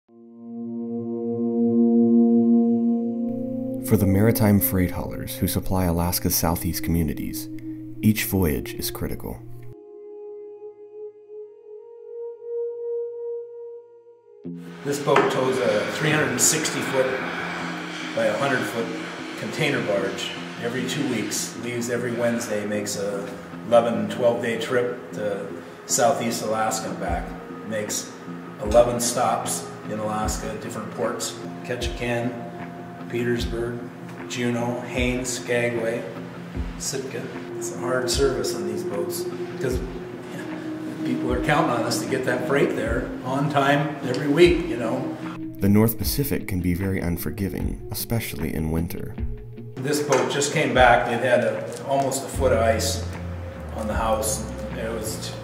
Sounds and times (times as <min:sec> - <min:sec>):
Ambient music: 0:00.1 - 0:55.4
Speech: 0:03.8 - 0:09.4, 0:14.9 - 0:17.2, 0:18.2 - 0:32.4, 0:33.1 - 0:36.1, 0:36.8 - 0:39.8, 0:41.1 - 0:49.2, 0:49.8 - 0:53.1, 0:53.7 - 0:55.4.